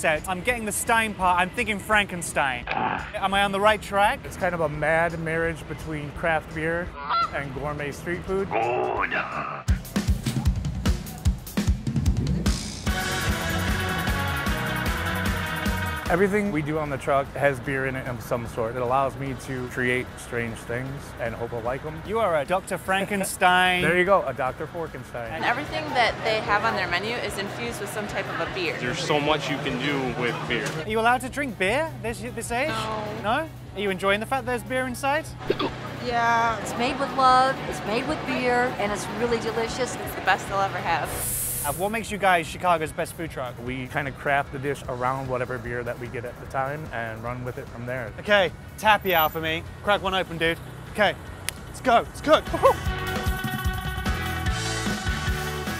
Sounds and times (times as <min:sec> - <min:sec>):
Music: 0:00.0 - 0:20.2, 0:23.8 - 0:55.7.